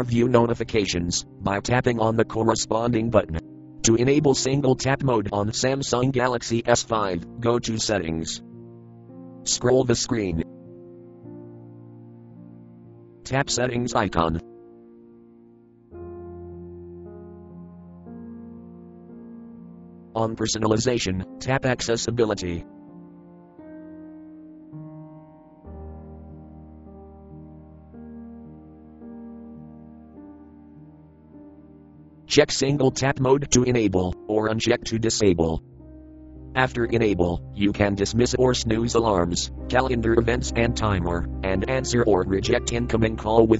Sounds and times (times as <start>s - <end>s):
Speech synthesizer: 0.0s - 8.4s, 9.5s - 10.5s, 13.3s - 14.4s, 20.2s - 22.6s, 32.3s - 35.6s, 36.6s - 43.6s
Music: 0.0s - 43.6s.